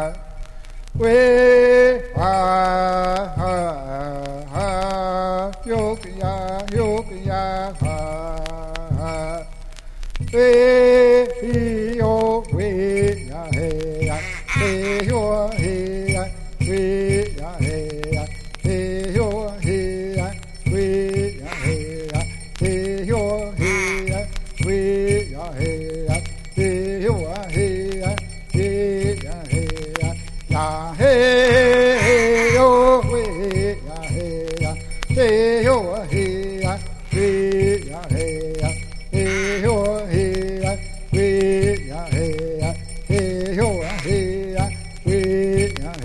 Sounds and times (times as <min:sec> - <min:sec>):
Music: 0:00.0 - 0:46.0.